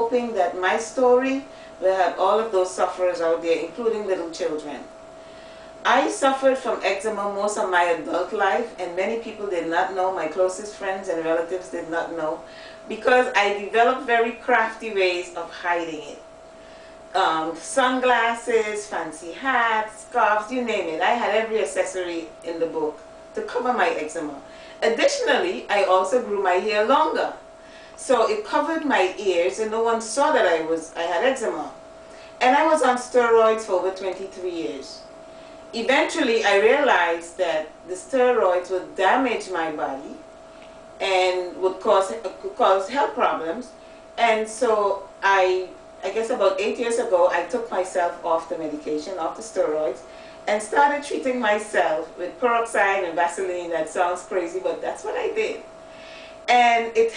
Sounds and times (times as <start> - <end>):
Speech: 0.0 - 4.9, 5.8 - 16.2, 17.2 - 27.4, 28.0 - 31.8, 32.4 - 35.0, 35.8 - 40.2, 41.0 - 55.6, 56.5 - 57.1.